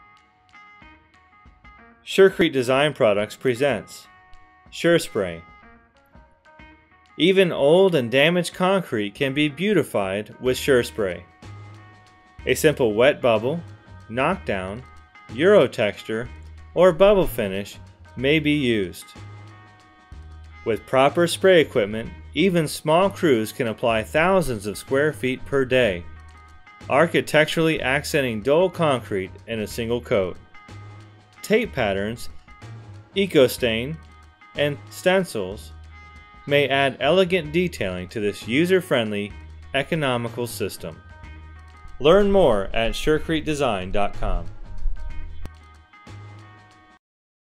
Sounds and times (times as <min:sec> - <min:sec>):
Music: 0:00.0 - 0:47.0
Speech: 0:02.1 - 0:04.1, 0:04.8 - 0:05.5, 0:07.2 - 0:11.2, 0:12.5 - 0:19.1, 0:20.7 - 0:26.1, 0:26.9 - 0:30.4, 0:31.4 - 0:32.3, 0:33.2 - 0:34.0, 0:34.6 - 0:35.7, 0:36.5 - 0:41.0, 0:42.0 - 0:44.5.